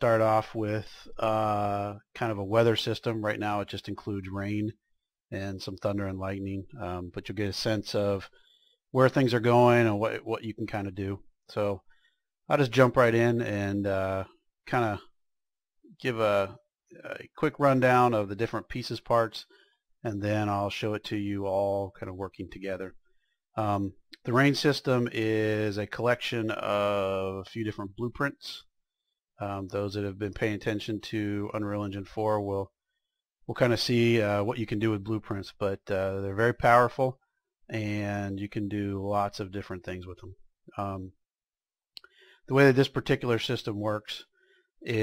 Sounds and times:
Speech: 0.0s - 8.3s, 9.0s - 11.8s, 12.5s - 15.1s, 16.0s - 23.0s, 23.6s - 28.7s, 29.4s - 32.7s, 33.5s - 41.2s, 42.5s - 44.2s.

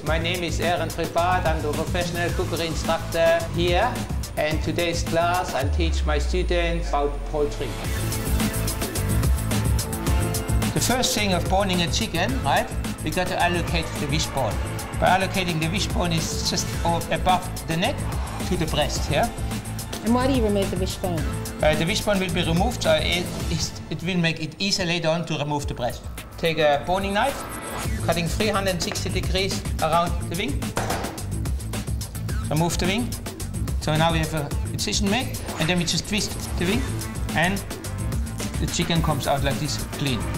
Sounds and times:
Music: 0.0s - 40.3s
Speech: 32.5s - 33.1s, 33.8s - 37.7s, 38.6s - 40.3s.

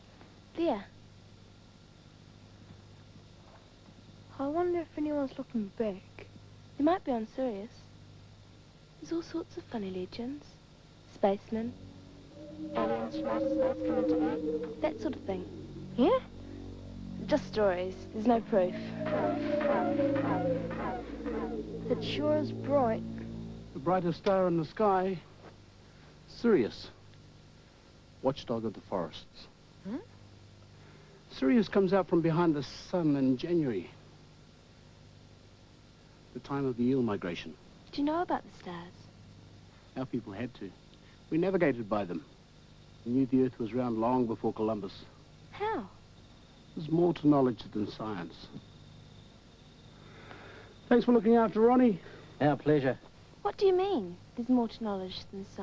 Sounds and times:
Speech: 12.8s - 16.3s, 17.2s - 18.9s, 23.8s - 25.2s, 40.0s - 40.7s, 41.4s - 42.2s, 43.1s - 45.9s, 46.8s - 48.6s, 50.9s - 55.6s.

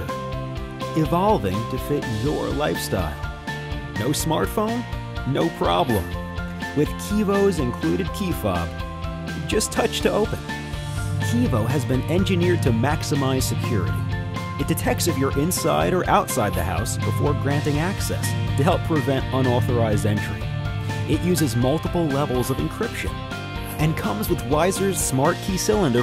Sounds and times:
Music: 0.0s - 26.0s
Speech: 0.9s - 3.2s, 4.0s - 6.1s, 6.8s - 8.7s, 9.4s - 10.4s, 11.2s - 14.0s, 14.6s - 20.4s, 21.1s - 23.2s, 23.8s - 26.0s.

